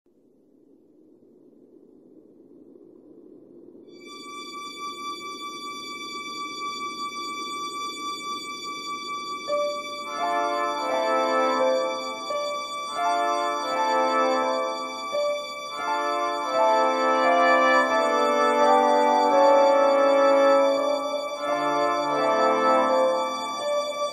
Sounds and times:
Music: 0:04.0 - 0:24.1.

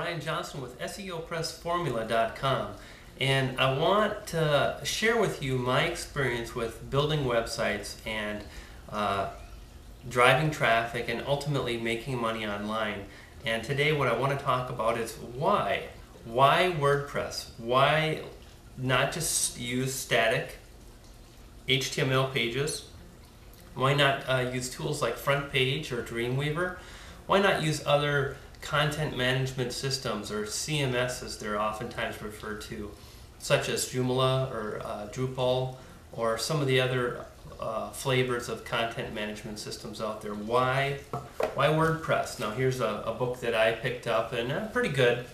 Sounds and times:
Speech: 0:00.0 - 0:20.7, 0:21.7 - 0:23.0, 0:23.7 - 0:45.3.

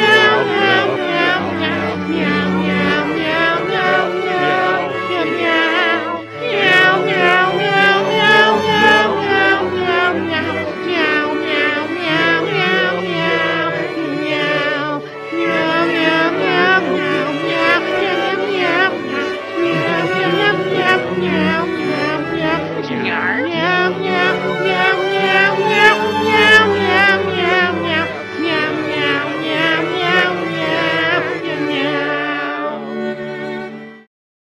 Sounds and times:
Music: 0:00.0 - 0:34.1.

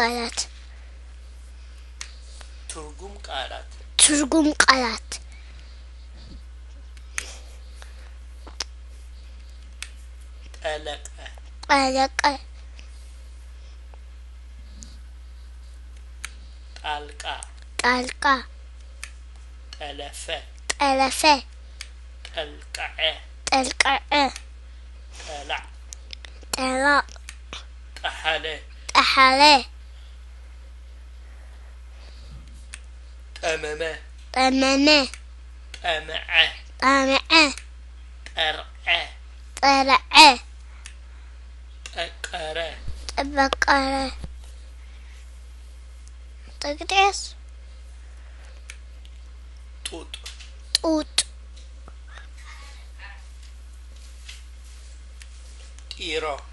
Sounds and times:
Child speech, kid speaking: 0:00.0 - 0:00.5, 0:04.0 - 0:05.2, 0:11.6 - 0:12.5, 0:17.8 - 0:18.5, 0:20.7 - 0:21.5, 0:22.4 - 0:24.4, 0:26.6 - 0:27.2, 0:28.9 - 0:29.7, 0:34.4 - 0:35.2, 0:36.4 - 0:37.6, 0:38.9 - 0:40.5, 0:43.1 - 0:44.3, 0:46.6 - 0:47.4, 0:50.8 - 0:51.3
Male speech, man speaking: 0:02.7 - 0:03.8, 0:10.6 - 0:11.4, 0:16.8 - 0:17.5, 0:19.8 - 0:20.5, 0:22.3 - 0:23.3, 0:25.2 - 0:25.7, 0:28.0 - 0:28.7, 0:33.4 - 0:34.1, 0:35.8 - 0:36.7, 0:38.4 - 0:39.2, 0:41.9 - 0:42.8, 0:49.9 - 0:50.3, 0:55.9 - 0:56.5.

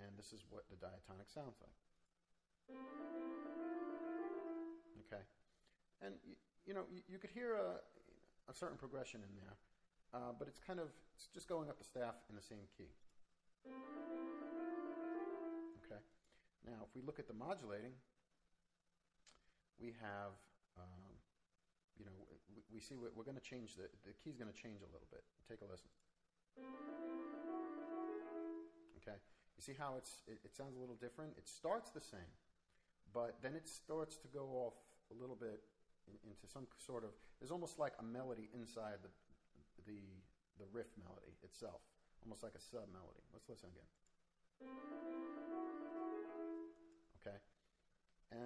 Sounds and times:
Piano: 0:02.7 - 0:05.0, 0:13.7 - 0:15.9, 0:26.6 - 0:28.9, 0:44.6 - 0:47.0.

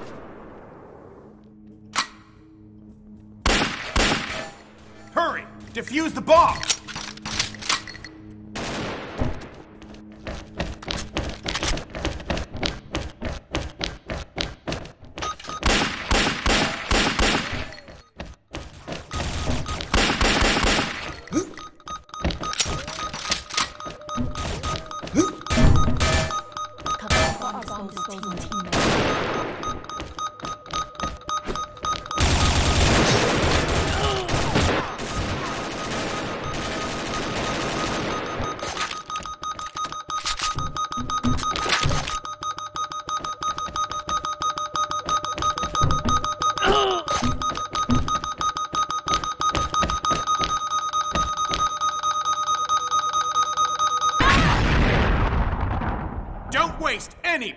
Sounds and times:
Music: 0:01.3 - 0:13.2.

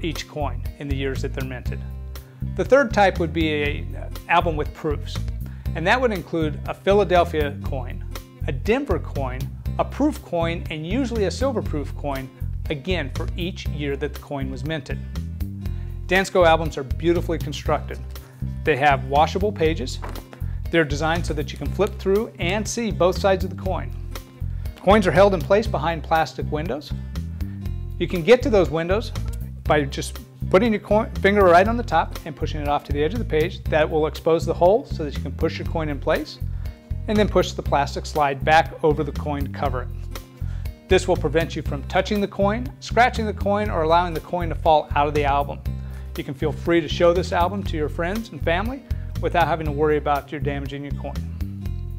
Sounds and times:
Speech: 0:00.0 - 0:01.8, 0:02.6 - 0:05.2, 0:05.8 - 0:15.0, 0:16.1 - 0:18.0, 0:18.7 - 0:20.0, 0:20.7 - 0:23.9, 0:24.8 - 0:27.0, 0:28.0 - 0:36.4, 0:37.1 - 0:39.9, 0:40.9 - 0:45.6, 0:46.2 - 0:51.2
Music: 0:00.0 - 0:51.9.

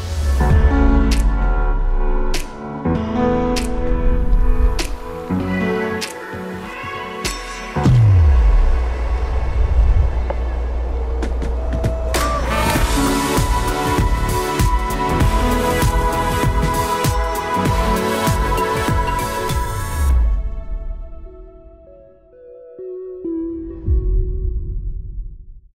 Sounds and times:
Music: 0:00.0 - 0:25.7.

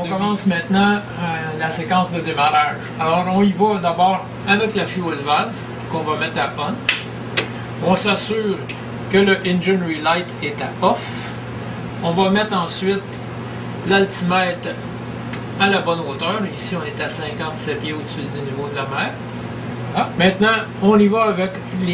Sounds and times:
Speech: 0:00.0 - 0:06.8, 0:07.8 - 0:11.3, 0:12.0 - 0:13.2, 0:13.8 - 0:14.9, 0:15.6 - 0:19.2, 0:19.9 - 0:21.9.

